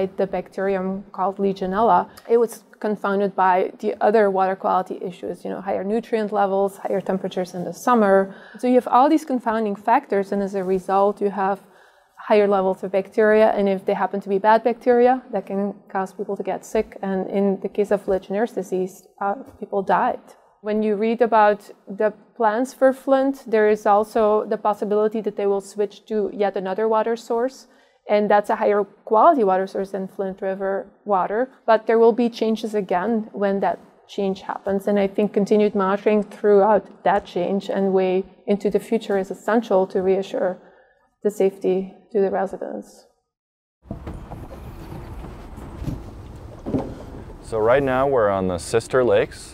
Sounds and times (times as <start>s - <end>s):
Speech: 0.0s - 11.6s, 12.2s - 40.6s, 41.3s - 43.0s, 47.4s - 49.5s.